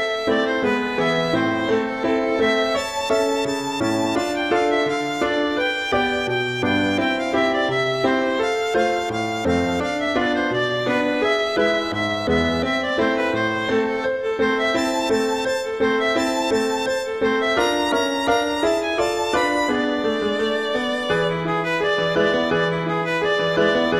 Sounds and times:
Violin, fiddle: 0.0s - 23.9s.

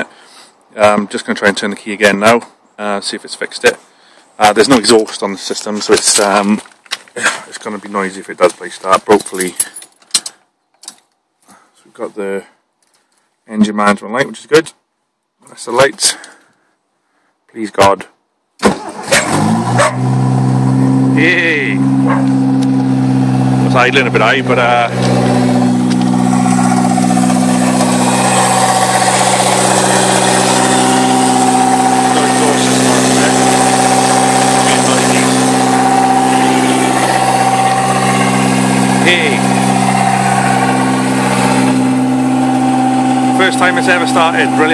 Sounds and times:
Speech: 0.7s - 3.8s, 4.4s - 9.6s, 11.8s - 12.6s, 13.5s - 14.8s, 15.4s - 16.3s, 17.5s - 18.2s, 21.2s - 21.8s, 23.6s - 24.9s, 32.1s - 33.4s, 34.6s - 35.3s, 39.0s - 39.5s, 43.4s - 44.7s
Vehicle: 3.4s - 12.1s, 18.6s - 44.7s
Medium engine (mid frequency): 3.9s - 10.3s, 18.6s - 44.7s
Idling: 21.8s - 44.7s.

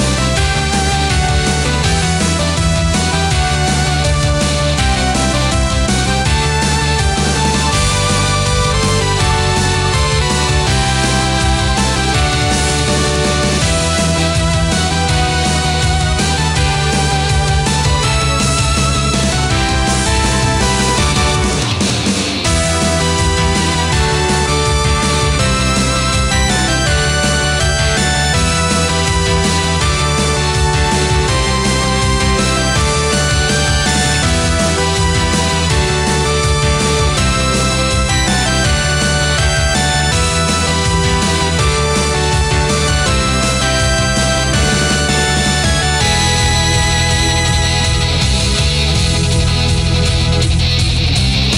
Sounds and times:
Music: 0.0s - 51.5s.

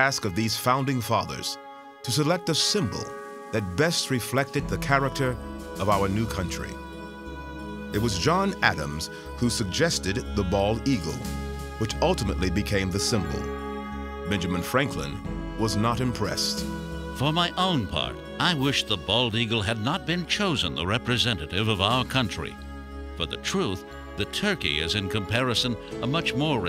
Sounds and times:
Speech: 0.0s - 6.8s, 8.0s - 13.6s, 14.3s - 16.6s, 17.2s - 22.6s, 23.2s - 26.6s
Music: 0.0s - 26.6s.

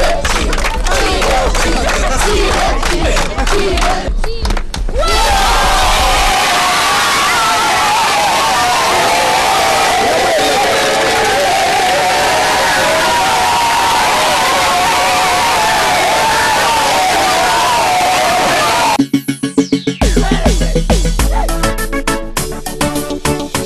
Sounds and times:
Crowd: 0.0s - 19.0s
Cheering: 5.0s - 19.0s
Children shouting: 5.0s - 19.0s.

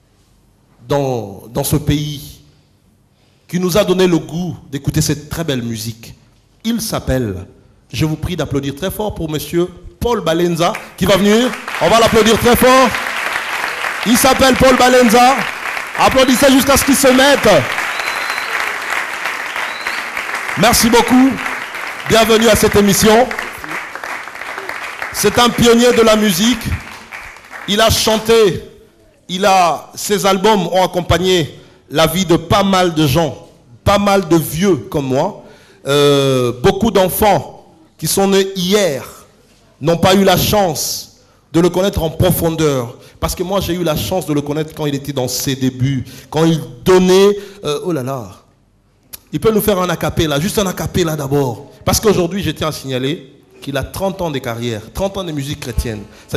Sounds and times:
Speech: 0.8s - 2.4s, 3.5s - 13.0s, 14.0s - 17.7s, 20.6s - 21.5s, 22.1s - 23.8s, 25.2s - 26.8s, 27.7s - 48.5s, 49.2s - 56.3s.

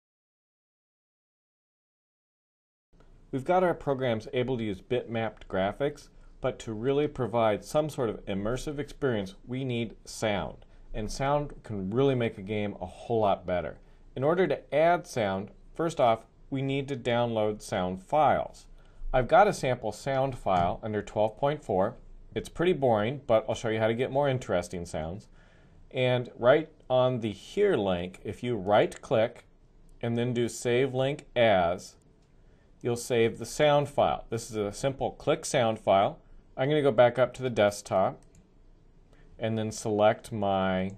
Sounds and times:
Speech: 3.4s - 25.3s, 25.9s - 32.0s, 32.8s - 38.3s, 39.4s - 40.9s.

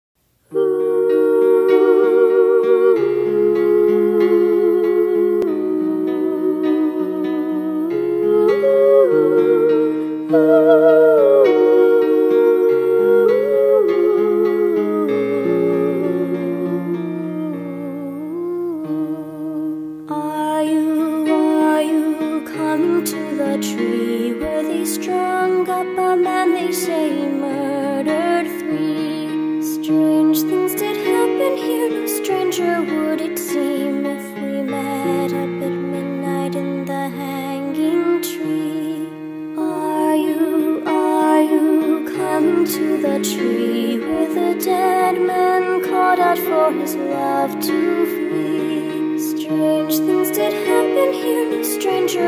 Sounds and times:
Lullaby: 0.4s - 52.2s.

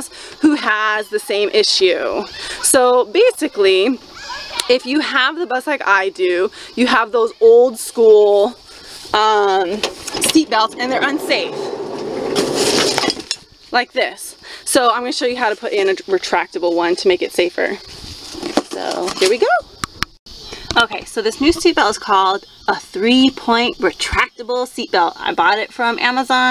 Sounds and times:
Speech: 0.0s - 8.6s, 9.2s - 11.7s, 13.8s - 17.8s, 18.7s - 19.6s, 20.7s - 26.5s
Outside, rural or natural: 0.0s - 26.5s.

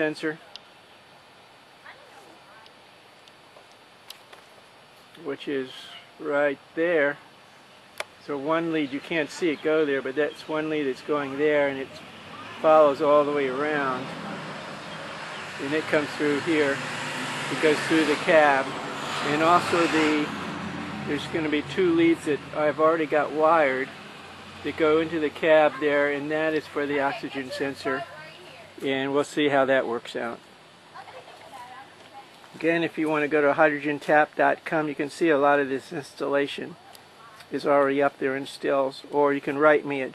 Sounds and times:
Engine: 10.9s - 29.0s
Speech: 21.1s - 23.9s, 24.6s - 30.4s.

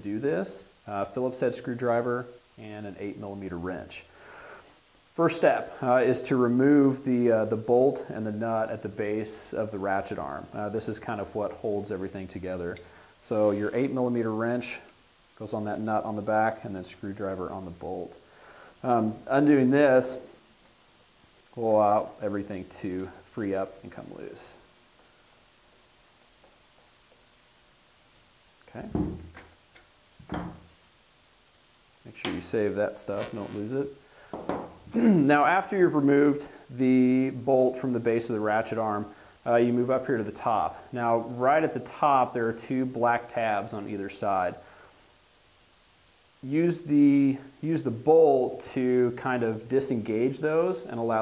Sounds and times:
Speech: 0.0s - 4.1s, 5.2s - 18.2s, 18.8s - 20.4s, 21.5s - 24.6s, 28.6s - 29.2s, 32.0s - 34.0s, 35.0s - 44.6s, 46.4s - 51.2s.

